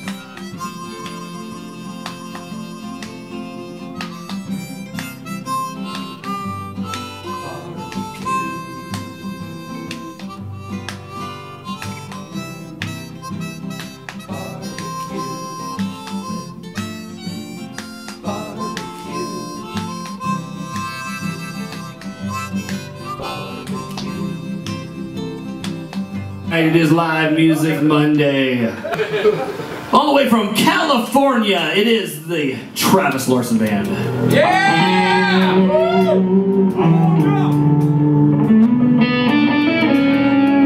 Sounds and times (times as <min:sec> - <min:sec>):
Music: 0:00.0 - 0:28.0, 0:33.6 - 0:40.6
Speech: 0:26.5 - 0:28.8, 0:29.9 - 0:34.6.